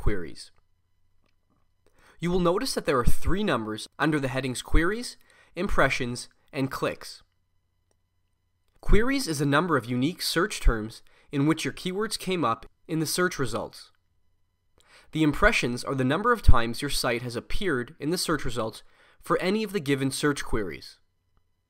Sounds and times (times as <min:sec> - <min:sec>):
Speech: 0:00.0 - 0:00.6, 0:02.2 - 0:07.3, 0:08.8 - 0:14.0, 0:15.1 - 0:21.1.